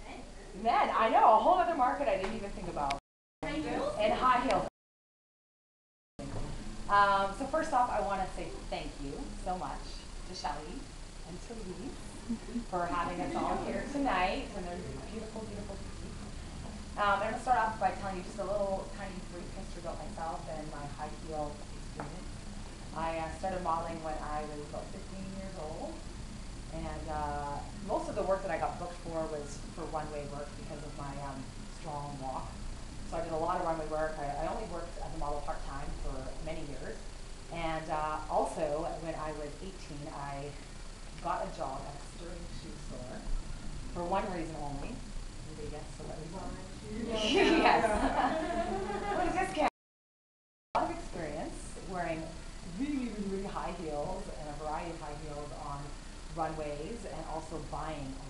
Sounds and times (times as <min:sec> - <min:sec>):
Speech: 0:00.0 - 0:04.7, 0:06.2 - 0:16.2, 0:17.0 - 0:22.3, 0:23.0 - 0:26.0, 0:26.7 - 0:40.6, 0:41.2 - 0:43.3, 0:43.9 - 0:48.2, 0:50.8 - 0:58.2.